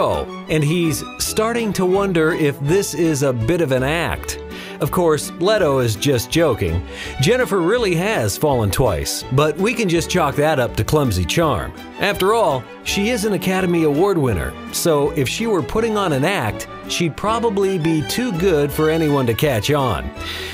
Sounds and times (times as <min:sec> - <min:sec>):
Speech: 0:00.0 - 0:20.1
Music: 0:00.0 - 0:20.5.